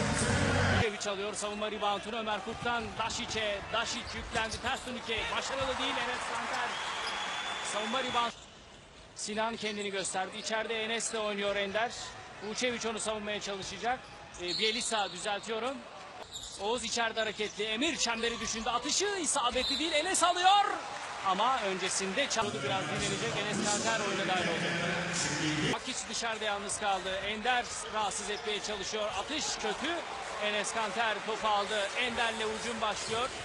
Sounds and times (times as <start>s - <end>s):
Speech: 0.8s - 6.8s, 7.7s - 8.3s, 9.2s - 15.8s, 16.6s - 33.4s.